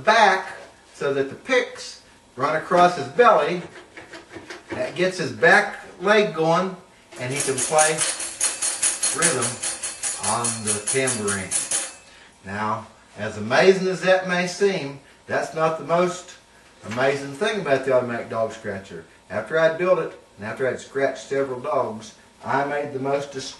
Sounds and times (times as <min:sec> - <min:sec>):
Speech: 0:00.0 - 0:03.7, 0:04.7 - 0:08.1, 0:09.1 - 0:09.6, 0:10.2 - 0:11.7, 0:12.4 - 0:23.5.